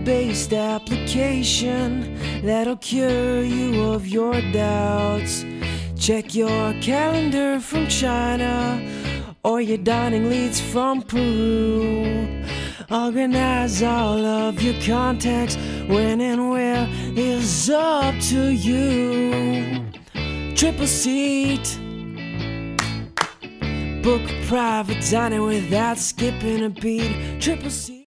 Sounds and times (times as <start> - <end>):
Male singing: 0.0 - 19.9, 20.6 - 21.8, 24.0 - 28.0
Music: 0.0 - 28.0.